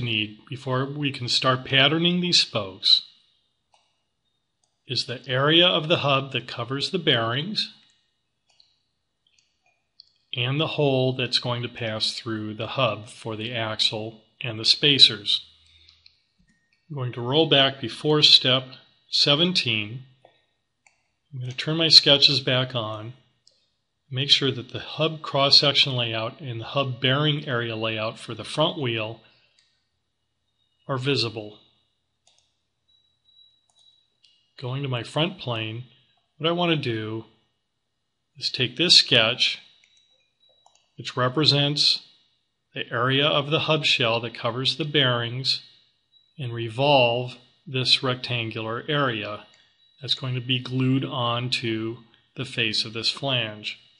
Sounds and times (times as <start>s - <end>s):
Speech: 0.0s - 3.1s, 4.9s - 7.8s, 10.4s - 15.5s, 16.9s - 20.1s, 21.4s - 23.2s, 24.1s - 29.2s, 30.9s - 31.6s, 34.6s - 37.3s, 38.4s - 39.7s, 41.0s - 42.0s, 42.8s - 45.7s, 46.4s - 53.8s.